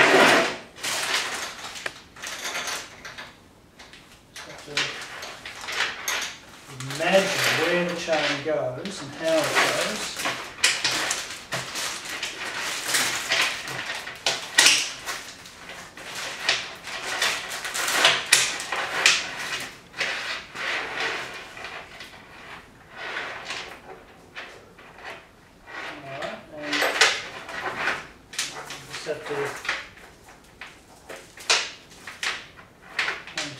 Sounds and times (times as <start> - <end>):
Inside, small room: 0.0 - 33.5
Speech: 6.7 - 10.2, 25.9 - 27.0, 28.6 - 29.6, 33.4 - 33.5.